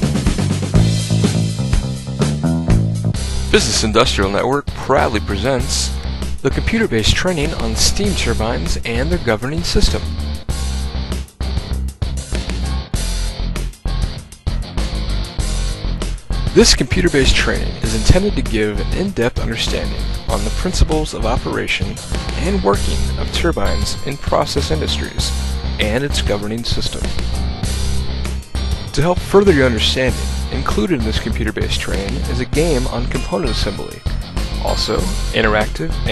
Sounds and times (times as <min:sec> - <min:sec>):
Music: 0:00.0 - 0:36.1
Speech: 0:03.5 - 0:10.2, 0:16.6 - 0:27.2, 0:28.9 - 0:34.0, 0:34.6 - 0:36.1.